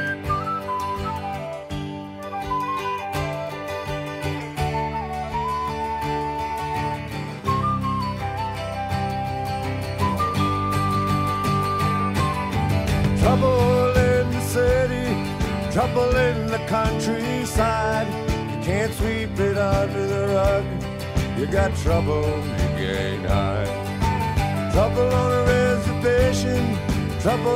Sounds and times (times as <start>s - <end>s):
Music: 0.0s - 27.5s.